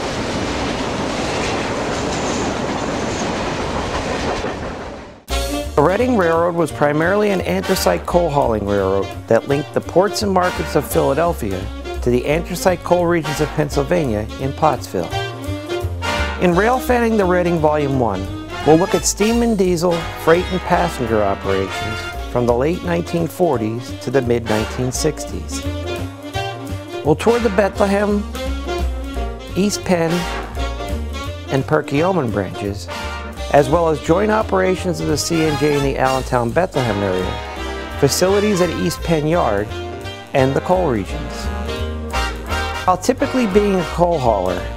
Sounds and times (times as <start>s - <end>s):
Music: 5.3s - 44.7s
Speech: 5.8s - 15.2s, 16.4s - 25.6s, 27.1s - 28.2s, 29.6s - 30.4s, 31.5s - 32.9s, 33.5s - 37.4s, 38.0s - 39.7s, 40.4s - 41.5s, 42.9s - 44.7s.